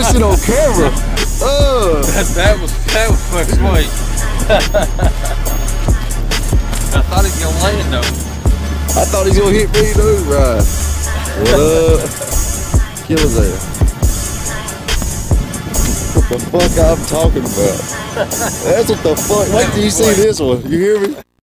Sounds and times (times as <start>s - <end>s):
Speech: 0.0s - 3.9s, 9.0s - 10.7s, 11.4s - 12.1s, 13.1s - 13.6s, 16.4s - 17.8s, 18.6s - 21.3s
Music: 0.0s - 21.0s.